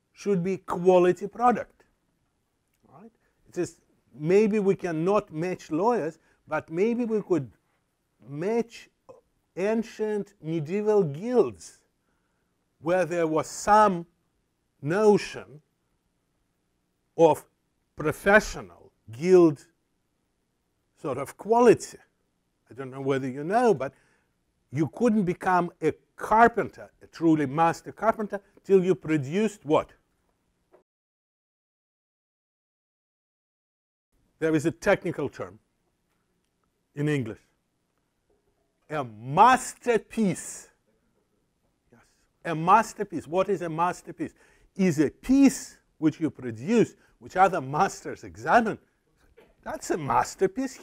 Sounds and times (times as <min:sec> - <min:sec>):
Speech: 0:00.2 - 0:01.8, 0:02.9 - 0:07.6, 0:08.2 - 0:11.8, 0:12.8 - 0:14.1, 0:14.8 - 0:15.6, 0:17.2 - 0:19.8, 0:21.0 - 0:22.1, 0:22.7 - 0:24.0, 0:24.7 - 0:30.0, 0:34.4 - 0:35.6, 0:37.0 - 0:37.4, 0:38.9 - 0:40.8, 0:42.0 - 0:48.8, 0:49.6 - 0:50.8.